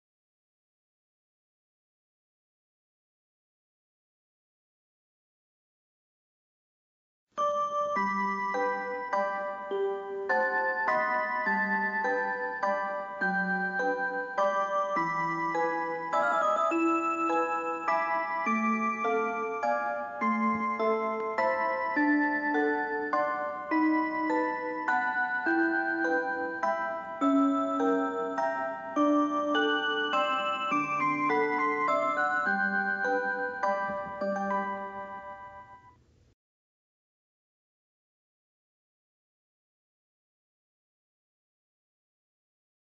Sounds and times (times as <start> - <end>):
Music: 7.4 - 36.1.